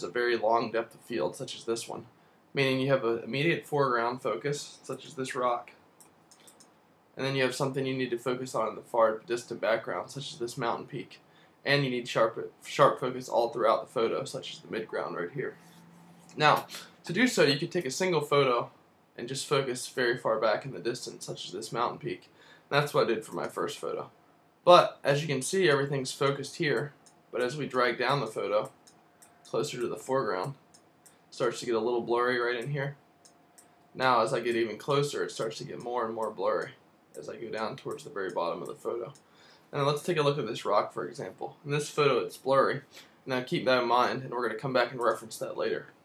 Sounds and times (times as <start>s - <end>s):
Speech: 0.0s - 5.8s, 7.2s - 15.6s, 16.3s - 28.8s, 29.5s - 30.6s, 31.3s - 33.0s, 34.0s - 46.0s.